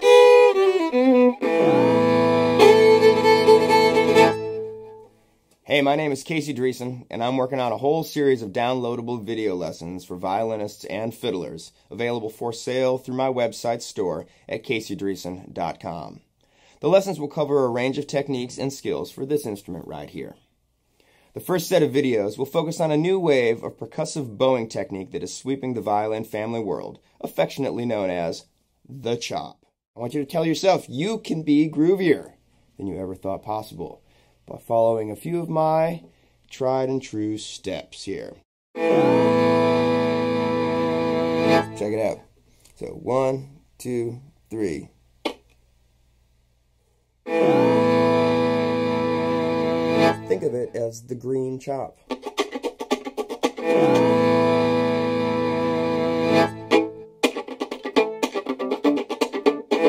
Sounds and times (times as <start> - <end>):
Speech: 5.7 - 20.5, 21.4 - 38.5, 41.8 - 45.0, 50.2 - 52.0.